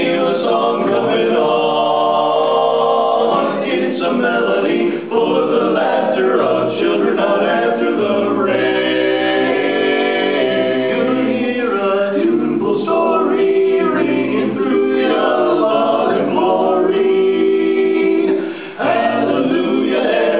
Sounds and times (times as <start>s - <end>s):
Choir: 0.0s - 20.4s.